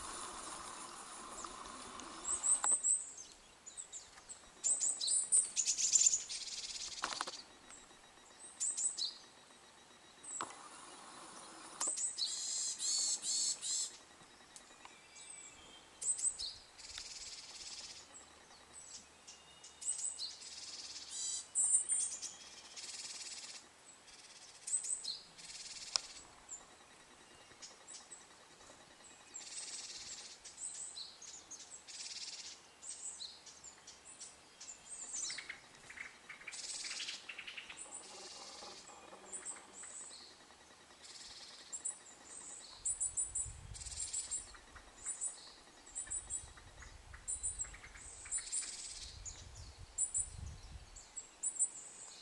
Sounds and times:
Bird vocalization, bird call, bird song: 0.0s - 52.2s.

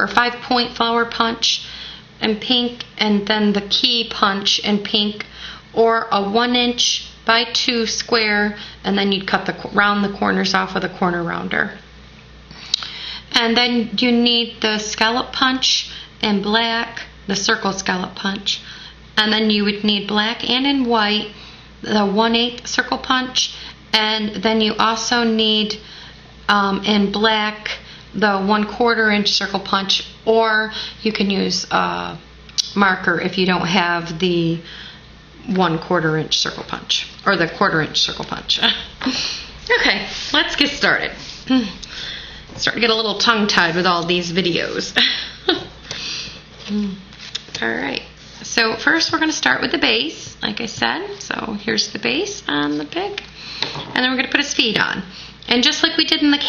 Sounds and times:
Speech: 0.0s - 11.8s, 13.3s - 18.6s, 19.2s - 25.8s, 26.5s - 34.7s, 35.4s - 39.0s, 39.7s - 41.8s, 42.6s - 45.0s, 46.6s - 53.3s, 53.9s - 56.4s.

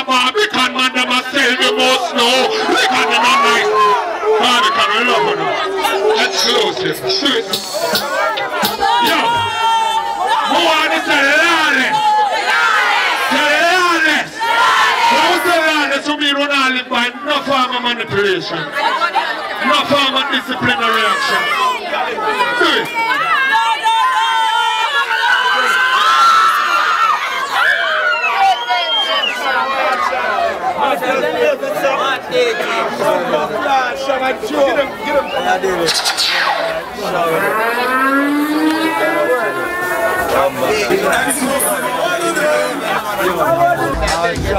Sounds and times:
Cheering: 0.0s - 17.7s, 18.6s - 44.5s
Crowd: 0.0s - 44.5s.

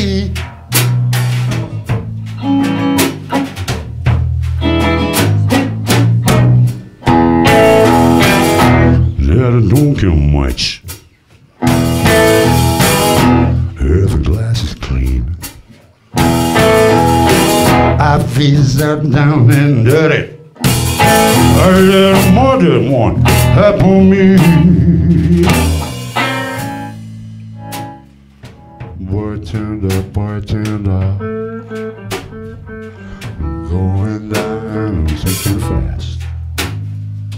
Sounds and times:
Speech: 9.2s - 10.9s, 13.8s - 15.9s, 35.1s - 36.2s.

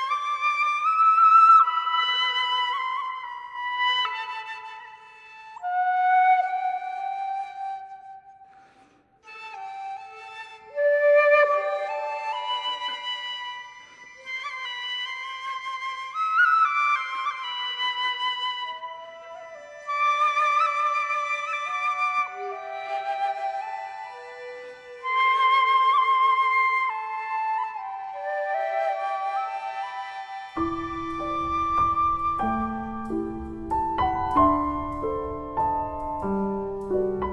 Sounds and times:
Flute: 0.0s - 37.3s.

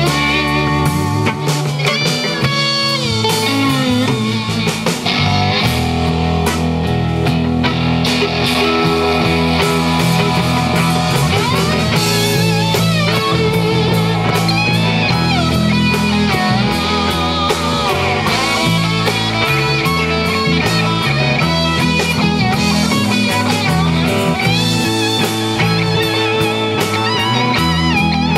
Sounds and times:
Guitar: 0.0s - 28.3s
Punk rock: 0.0s - 28.3s.

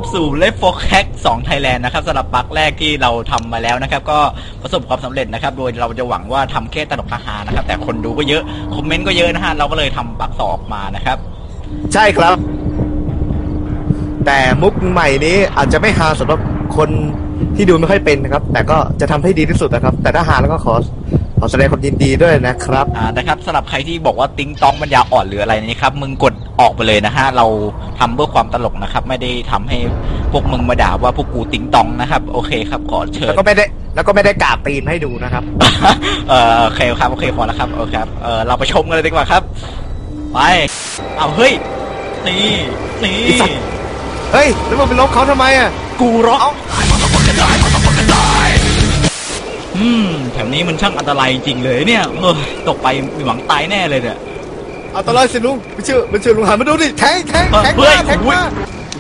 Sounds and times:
Speech: 0.0s - 11.2s, 11.9s - 12.4s, 14.2s - 39.5s, 40.4s - 43.7s, 44.3s - 48.7s, 49.8s - 54.2s, 55.0s - 58.6s.

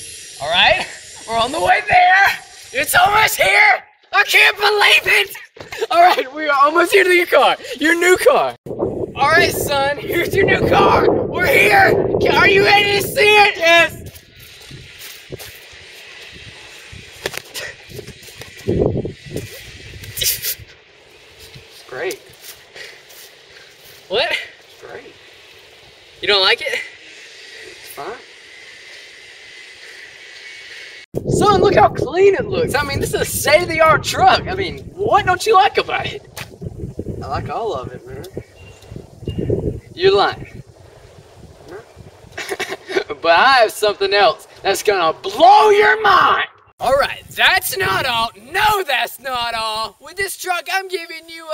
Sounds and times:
Speech: 9.2s - 14.0s, 31.3s - 36.2s, 43.1s - 51.5s.

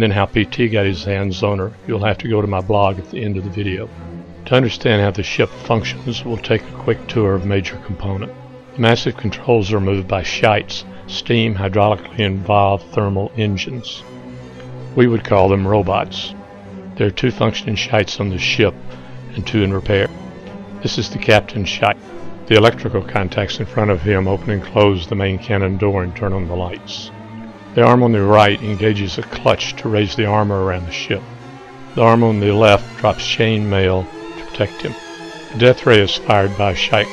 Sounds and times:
Speech: 0.0s - 3.9s, 4.5s - 14.0s, 15.0s - 16.4s, 17.0s - 20.1s, 20.8s - 27.1s, 27.8s - 31.2s, 32.0s - 35.0s, 35.6s - 37.1s
Music: 0.0s - 37.1s.

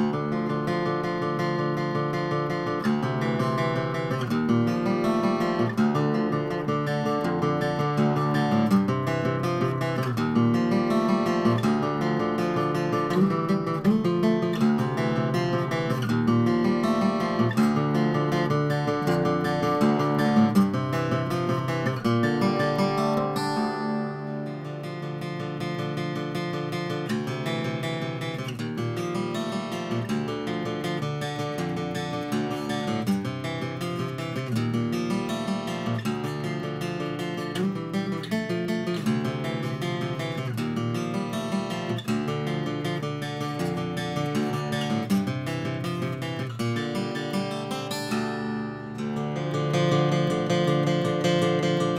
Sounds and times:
Acoustic guitar: 0.0s - 51.9s.

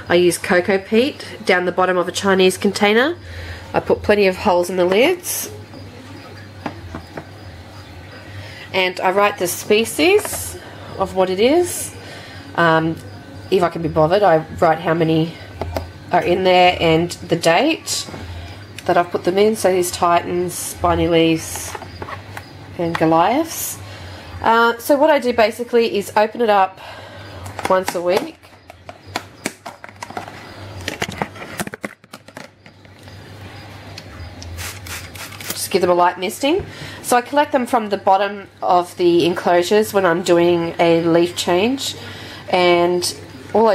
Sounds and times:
Speech: 12.6s - 15.4s, 16.1s - 18.1s, 24.4s - 26.7s, 35.6s - 43.7s.

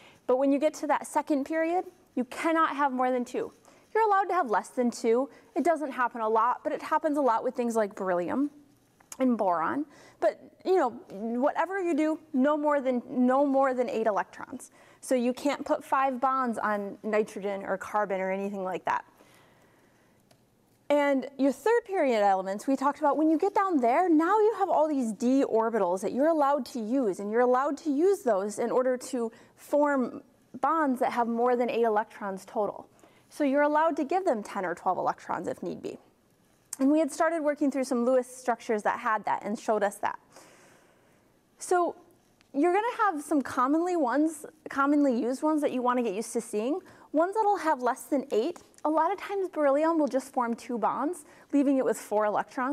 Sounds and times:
Speech: 0.3s - 8.6s, 9.2s - 19.1s, 20.9s - 36.1s, 36.8s - 40.2s, 41.6s - 52.7s.

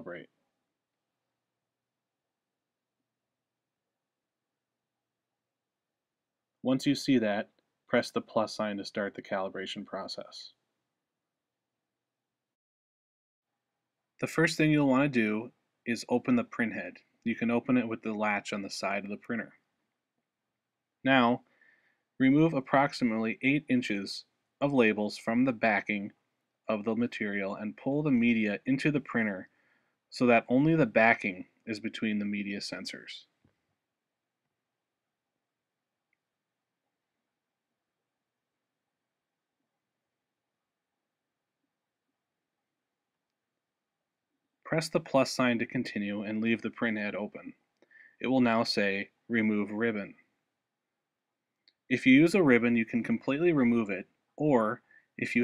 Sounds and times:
Speech: 0.0s - 0.4s, 6.6s - 10.6s, 14.2s - 19.6s, 21.0s - 21.5s, 22.2s - 29.5s, 30.1s - 33.3s, 44.7s - 50.2s, 51.9s - 55.4s.

